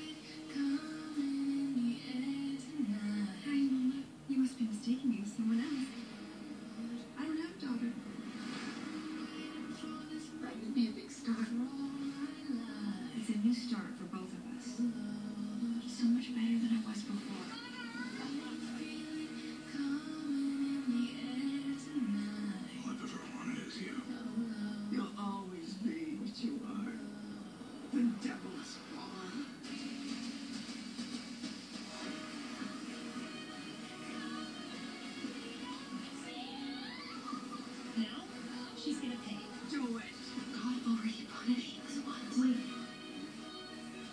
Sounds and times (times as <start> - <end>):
Music: 0.0 - 44.1.